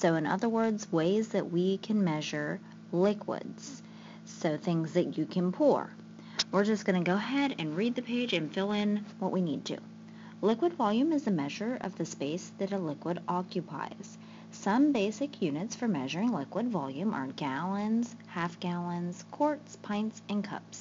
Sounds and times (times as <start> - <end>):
Speech: 0.0 - 20.8.